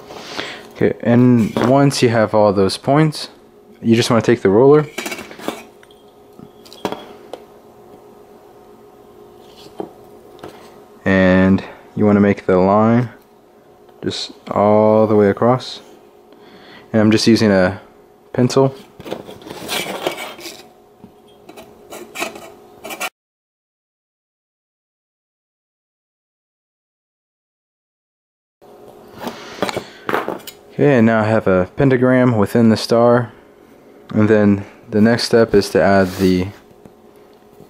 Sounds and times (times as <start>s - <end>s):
Speech: 0.8s - 4.9s, 11.0s - 13.2s, 14.0s - 15.9s, 16.9s - 18.8s, 30.7s - 33.4s, 34.1s - 36.6s.